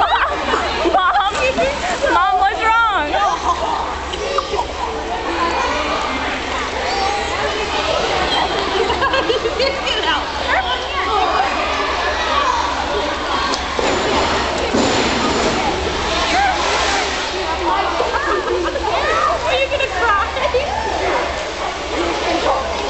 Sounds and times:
Speech: 0:00.0 - 0:22.9.

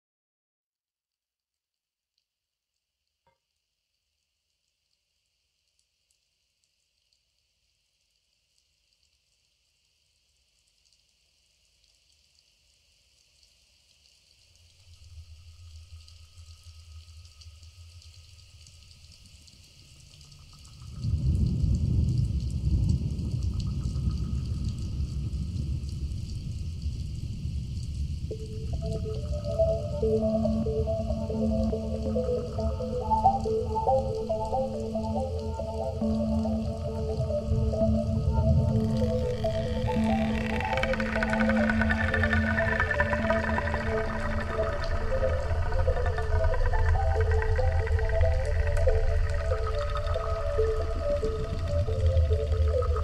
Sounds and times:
Music: 0:28.3 - 0:53.0.

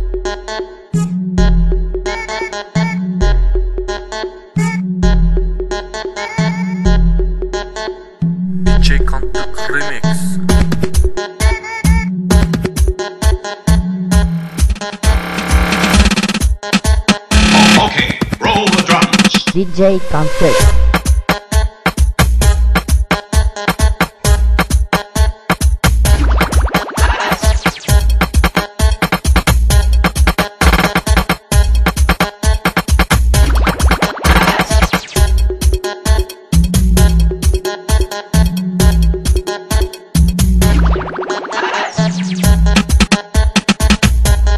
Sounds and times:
Dance music: 0:08.4 - 0:12.8, 0:13.7 - 0:23.0, 0:25.6 - 0:36.4, 0:38.4 - 0:44.5.

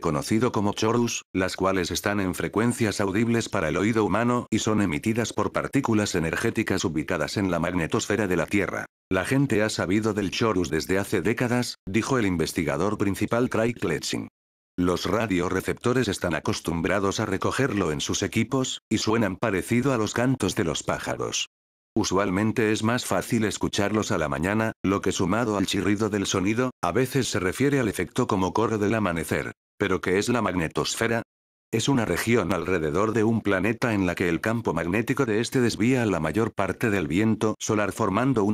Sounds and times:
Speech: 0:00.0 - 0:38.5.

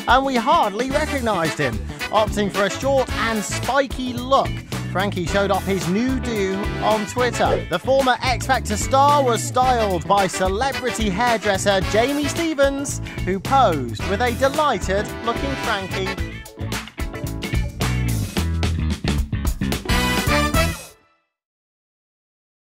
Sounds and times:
Speech: 0:00.0 - 0:16.2
Music: 0:00.0 - 0:21.4.

